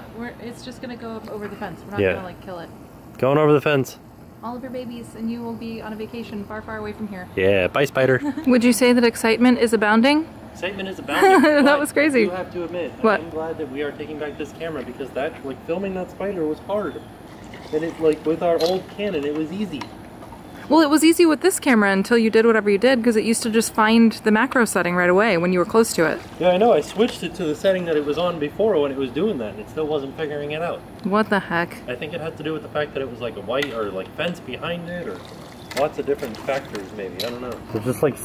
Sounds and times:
Water: 17.3 - 19.1, 34.6 - 38.2.

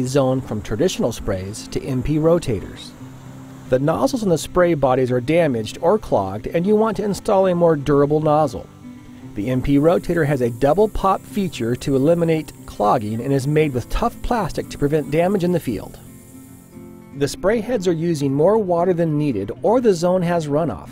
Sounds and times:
Speech: 0.0 - 2.9, 3.7 - 8.7, 9.4 - 16.0, 17.2 - 20.9
Music: 0.0 - 20.9
Spray: 0.9 - 4.8, 8.2 - 17.1.

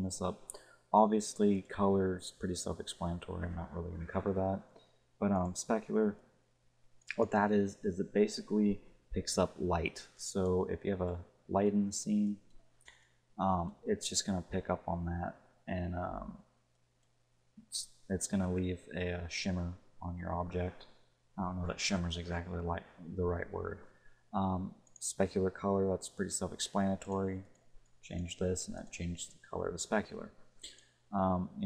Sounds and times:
Speech: 0.0 - 6.2, 7.1 - 12.4, 13.4 - 16.5, 17.6 - 30.4, 31.2 - 31.6.

